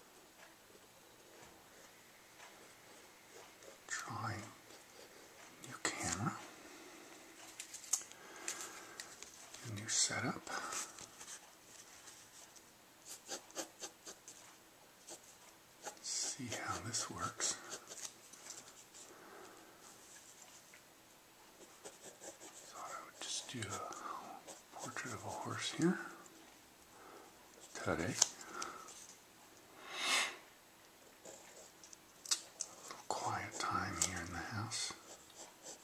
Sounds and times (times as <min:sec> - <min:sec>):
Speech: 0:09.6 - 0:10.7, 0:16.0 - 0:17.8, 0:22.8 - 0:24.1, 0:24.8 - 0:26.2, 0:27.8 - 0:28.3, 0:33.1 - 0:35.0.